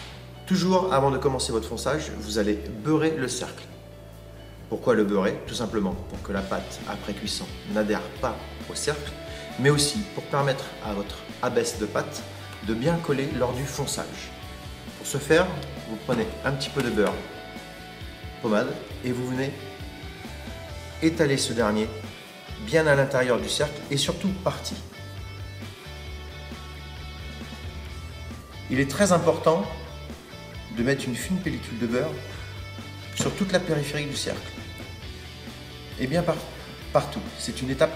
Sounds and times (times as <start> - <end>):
Music: 0.0 - 37.9
Speech: 0.5 - 3.8, 4.7 - 14.4, 15.0 - 17.3, 18.4 - 19.6, 21.0 - 24.9, 28.7 - 29.9, 30.7 - 32.3, 33.2 - 34.6, 36.0 - 37.9.